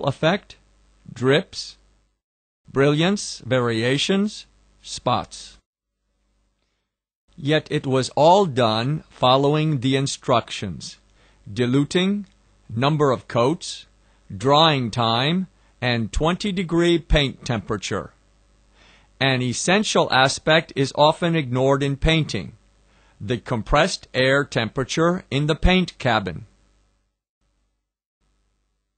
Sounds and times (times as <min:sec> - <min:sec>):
Speech: 0:00.0 - 0:01.8, 0:02.7 - 0:05.6, 0:07.4 - 0:18.2, 0:19.2 - 0:22.6, 0:23.2 - 0:26.5.